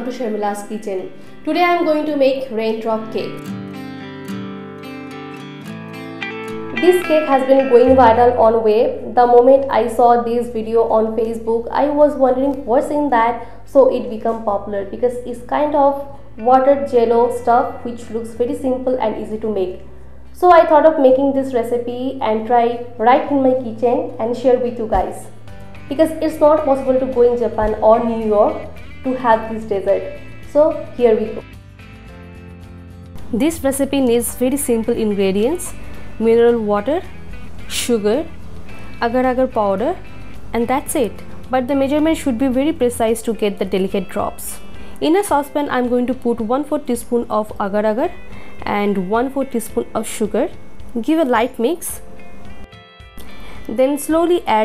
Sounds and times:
Speech: 0:00.0 - 0:03.4, 0:06.8 - 0:19.8, 0:20.4 - 0:25.3, 0:25.9 - 0:31.5, 0:33.4 - 0:37.0, 0:37.7 - 0:38.3, 0:39.0 - 0:40.0, 0:40.6 - 0:52.0, 0:53.7 - 0:54.6
Music: 0:00.0 - 0:54.6.

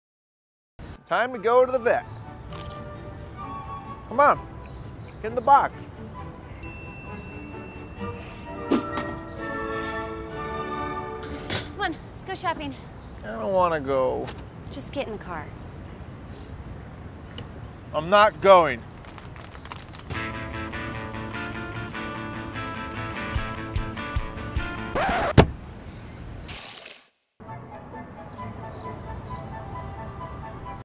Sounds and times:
Music: 0:01.0 - 0:11.6, 0:20.1 - 0:25.3, 0:27.4 - 0:30.8.

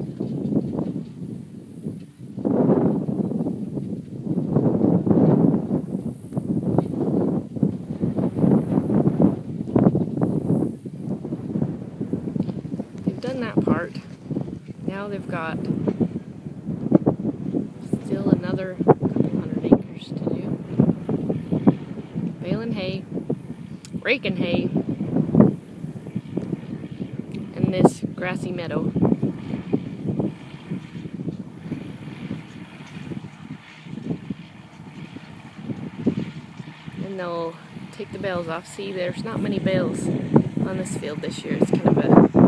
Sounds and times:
Speech: 0:13.1 - 0:14.1, 0:14.9 - 0:15.6, 0:17.9 - 0:20.6, 0:22.4 - 0:23.0, 0:24.0 - 0:24.7, 0:27.6 - 0:28.9, 0:37.0 - 0:42.2.

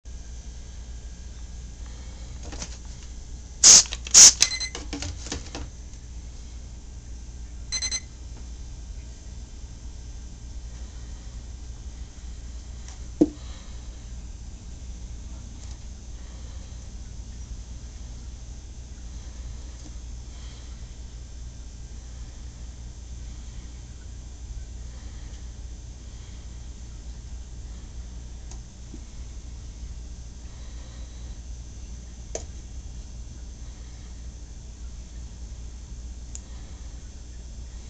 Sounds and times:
Spray: 0:03.6 - 0:04.5.

